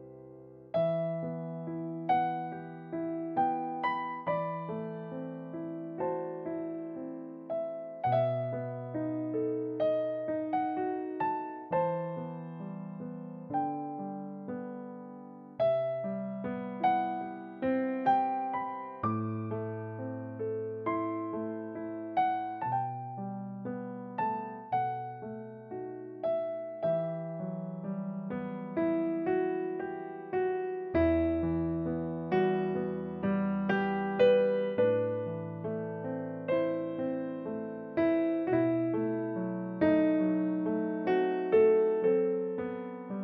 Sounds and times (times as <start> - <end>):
Electric piano: 0.0 - 43.2.